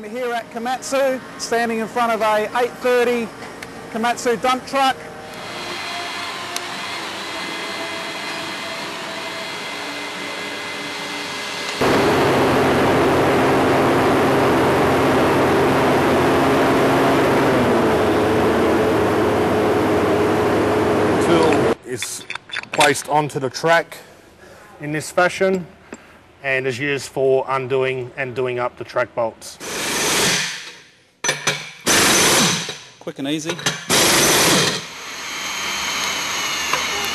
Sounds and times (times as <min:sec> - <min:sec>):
Speech: 0:00.0 - 0:03.3, 0:26.4 - 0:29.6, 0:33.0 - 0:33.6
Tools: 0:22.0 - 0:23.2, 0:30.2 - 0:32.9, 0:33.5 - 0:34.9.